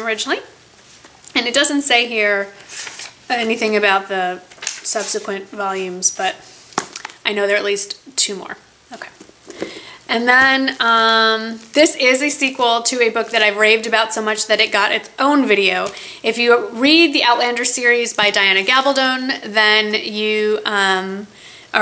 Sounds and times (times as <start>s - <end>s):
Speech: 0.0s - 0.6s, 1.4s - 2.6s, 3.3s - 6.4s, 7.3s - 9.2s, 10.1s - 21.8s.